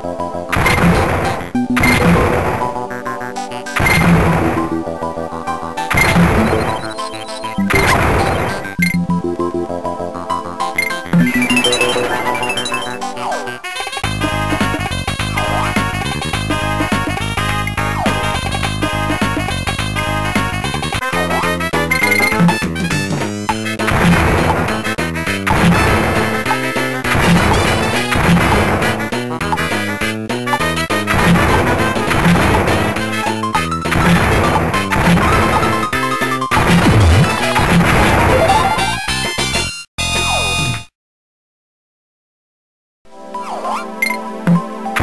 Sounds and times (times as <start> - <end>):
Music: 0.0 - 40.9, 43.1 - 45.0.